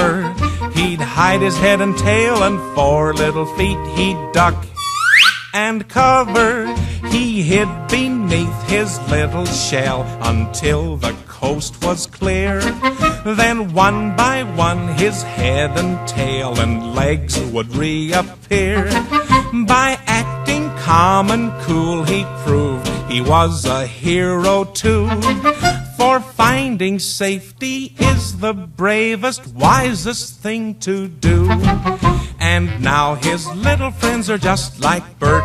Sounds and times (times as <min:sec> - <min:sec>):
Music: 0:00.0 - 0:27.0, 0:27.7 - 0:35.4.